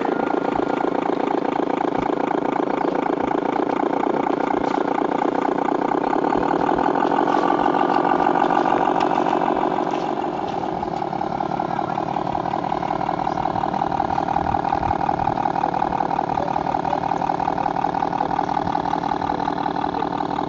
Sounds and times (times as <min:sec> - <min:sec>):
Vehicle: 0:00.0 - 0:20.4.